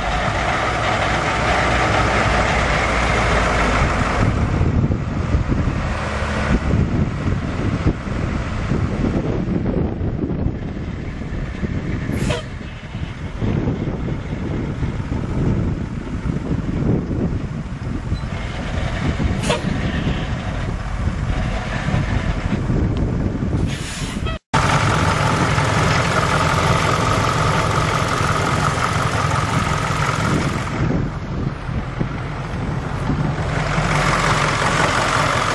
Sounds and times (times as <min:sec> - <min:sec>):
Truck: 0:00.0 - 0:35.5.